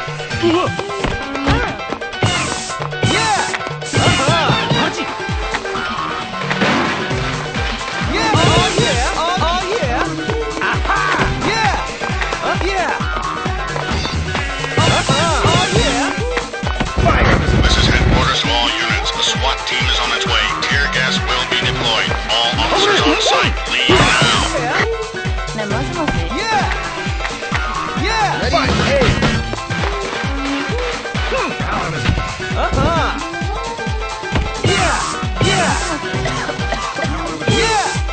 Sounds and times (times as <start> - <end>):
Music: 0.0 - 38.1.